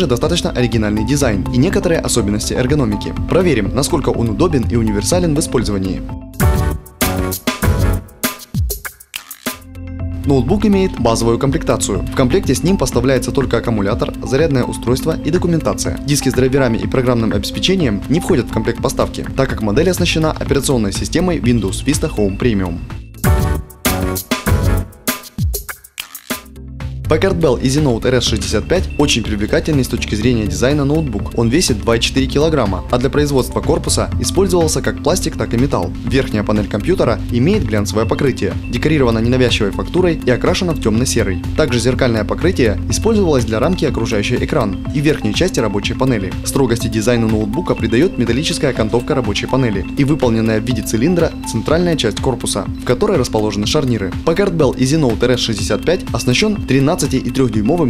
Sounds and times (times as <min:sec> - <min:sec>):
Speech: 0:00.0 - 0:06.1, 0:10.2 - 0:22.8, 0:27.1 - 0:57.9
Music: 0:00.0 - 0:57.9.